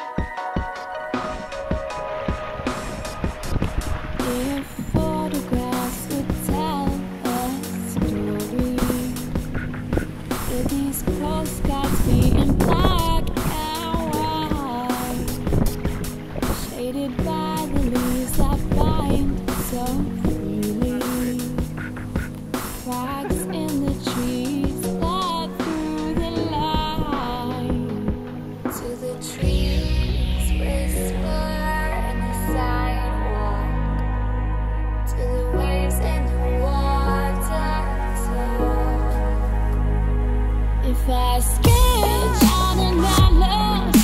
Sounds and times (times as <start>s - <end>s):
Music: 0.0s - 44.0s
Rowboat, canoe, kayak: 1.2s - 30.7s.